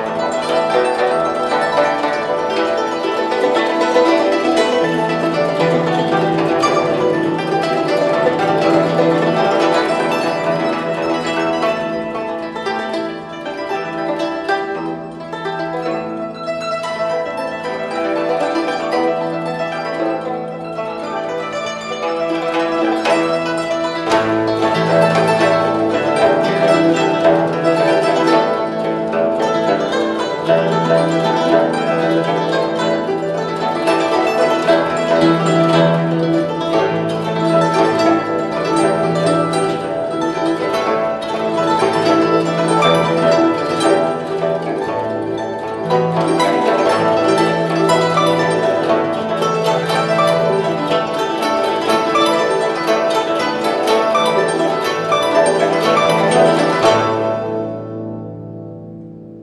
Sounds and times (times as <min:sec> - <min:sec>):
Classical music: 0:00.0 - 0:59.4
Zither: 0:00.0 - 0:59.4.